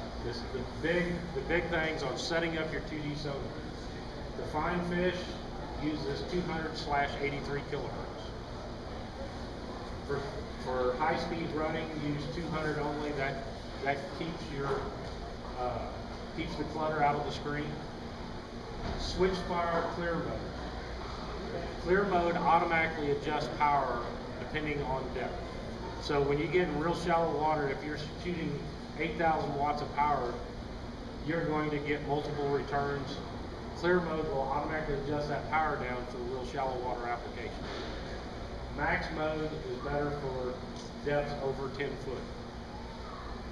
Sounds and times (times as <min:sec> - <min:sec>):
Speech: 0:00.2 - 0:08.4, 0:10.1 - 0:17.9, 0:18.9 - 0:20.6, 0:21.4 - 0:30.6, 0:31.2 - 0:37.7, 0:38.8 - 0:42.3.